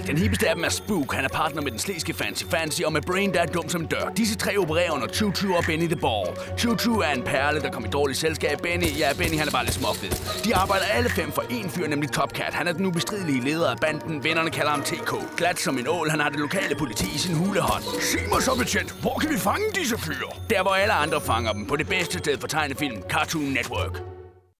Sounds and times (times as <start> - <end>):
Speech: 0.0 - 24.0
Music: 0.0 - 24.5.